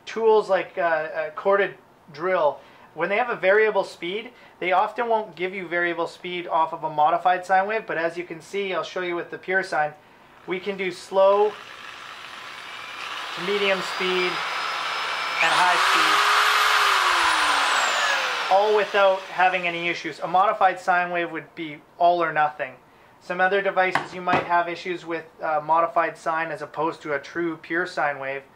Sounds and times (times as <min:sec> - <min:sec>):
Speech: 0:00.0 - 0:11.6, 0:13.4 - 0:14.4, 0:15.4 - 0:16.2, 0:18.5 - 0:28.5.